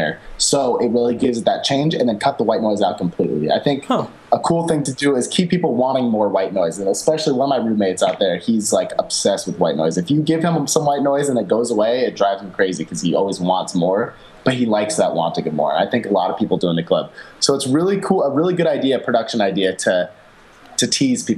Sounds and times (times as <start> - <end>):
Speech: 0.0 - 20.1, 20.8 - 21.3.